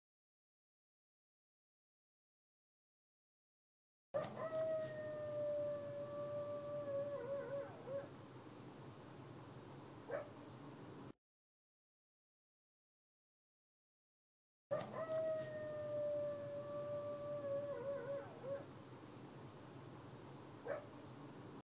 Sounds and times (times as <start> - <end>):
Howl: 4.2 - 8.1, 14.7 - 18.7.